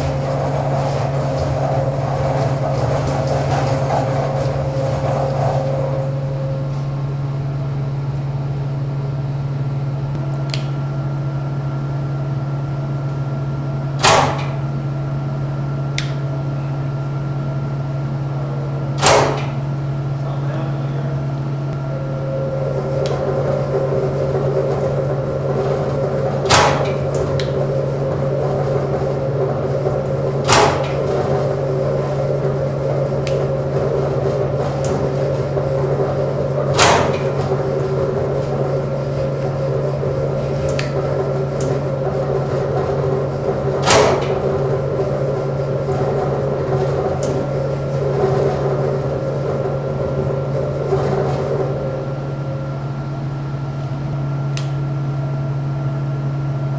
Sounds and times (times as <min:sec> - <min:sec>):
Inside, large room or hall: 0:00.0 - 0:56.7.